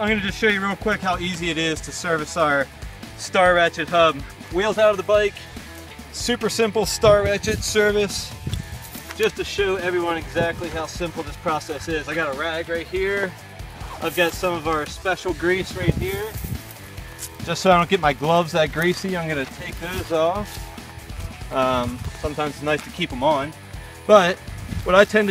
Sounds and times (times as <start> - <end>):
Speech: 0.0 - 5.4, 6.1 - 8.3, 9.2 - 16.4, 17.4 - 20.5, 21.5 - 25.3
Music: 0.0 - 25.3.